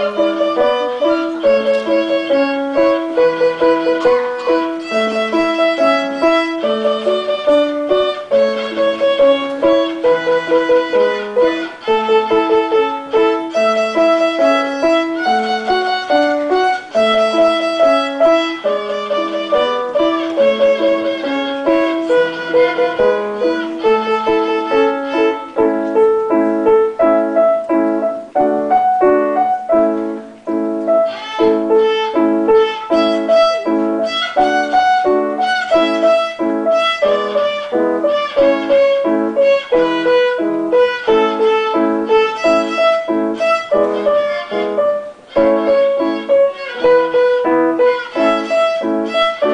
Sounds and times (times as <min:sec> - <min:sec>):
Violin, fiddle: 0:00.0 - 0:27.8, 0:29.9 - 0:49.5.